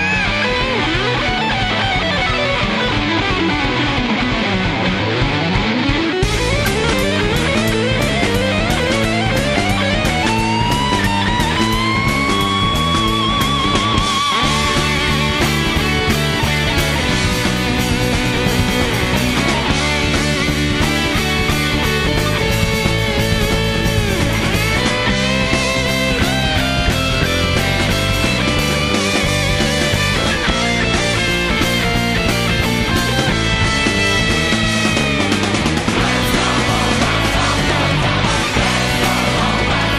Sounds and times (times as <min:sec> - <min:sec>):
Progressive rock: 0:00.0 - 0:39.9.